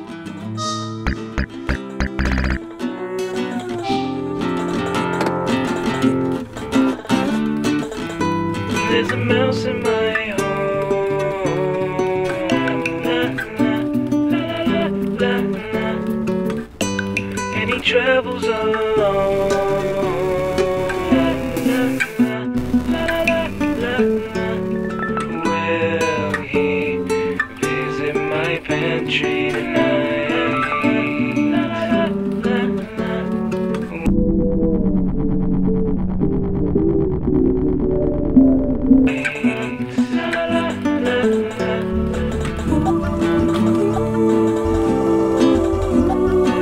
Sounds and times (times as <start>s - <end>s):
Soundtrack music: 0.5s - 2.7s, 18.8s - 26.6s, 33.9s - 40.6s
Video game music: 0.5s - 2.7s, 19.1s - 25.5s, 34.0s - 39.2s.